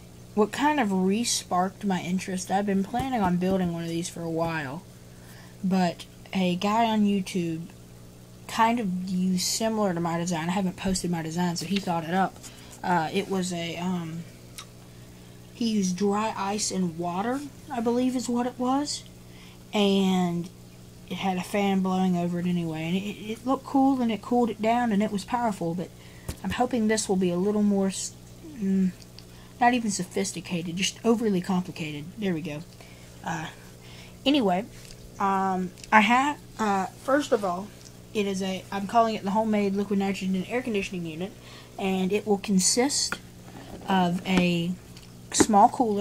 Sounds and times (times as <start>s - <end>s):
Speech: 0.4s - 4.8s, 5.6s - 7.8s, 8.5s - 14.3s, 15.6s - 19.1s, 19.7s - 29.0s, 29.6s - 33.6s, 34.2s - 46.0s.